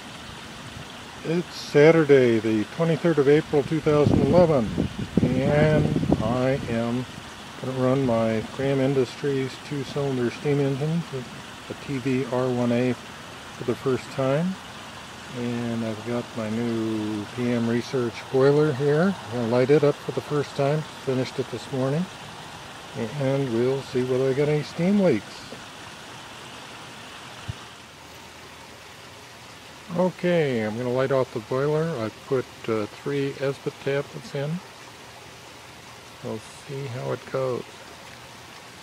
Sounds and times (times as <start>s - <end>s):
Rustle: 0.0s - 38.8s.